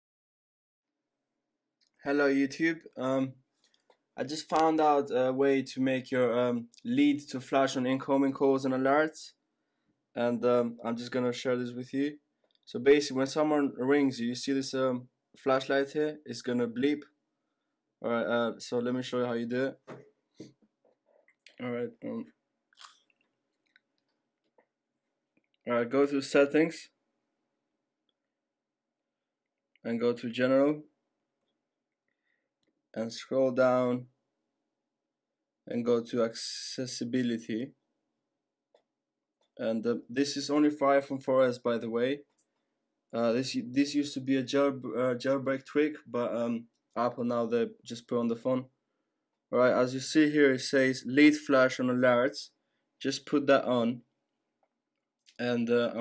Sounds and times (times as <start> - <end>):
Speech: 2.0 - 3.4, 4.2 - 9.4, 10.2 - 17.1, 18.0 - 19.9, 21.5 - 22.3, 25.7 - 27.0, 29.8 - 30.9, 33.0 - 34.1, 35.7 - 37.7, 39.6 - 42.3, 43.1 - 48.7, 49.5 - 54.1, 55.3 - 56.0.